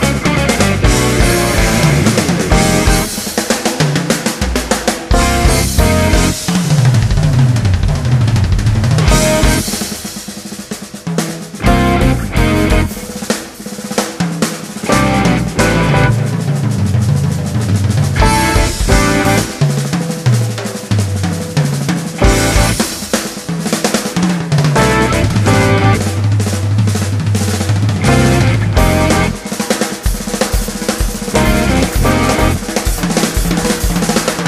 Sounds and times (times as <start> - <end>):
Bass drum: 0.0 - 10.0, 11.6 - 13.2, 14.9 - 19.6, 22.1 - 23.4, 24.7 - 34.4
Drum kit: 0.0 - 34.4
Drum roll: 0.0 - 34.4
Rimshot: 0.0 - 34.4.